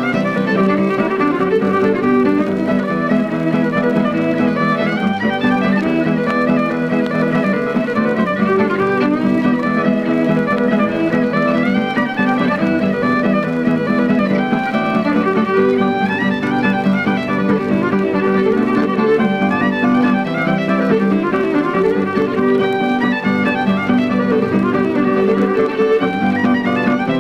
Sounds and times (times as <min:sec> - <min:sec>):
String section: 0:00.0 - 0:27.2.